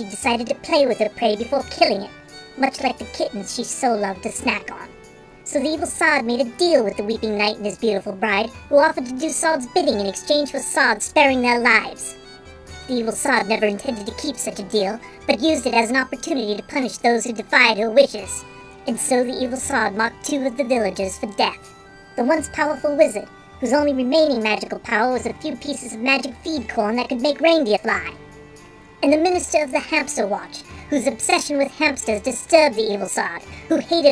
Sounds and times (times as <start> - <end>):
Speech: 0.0 - 4.9, 5.5 - 12.2, 12.8 - 28.2, 29.0 - 34.1
Music: 0.0 - 34.1.